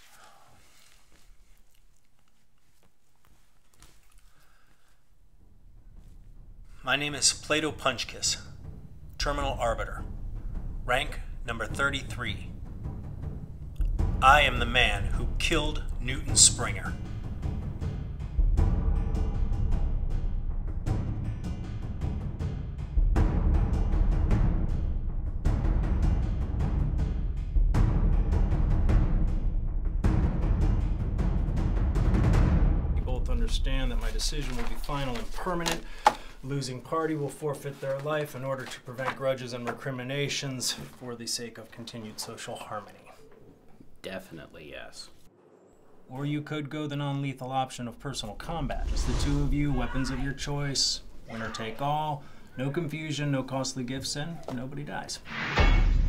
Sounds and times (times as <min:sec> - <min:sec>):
Music: 0:04.4 - 0:37.4, 0:54.7 - 0:56.0.